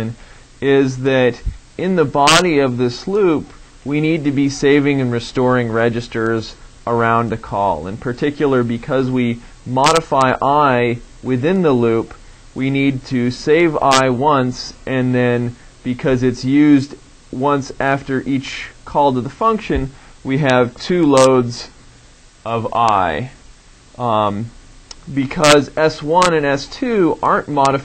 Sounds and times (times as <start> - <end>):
Speech: 0.0 - 21.8, 22.4 - 23.4, 24.0 - 27.8.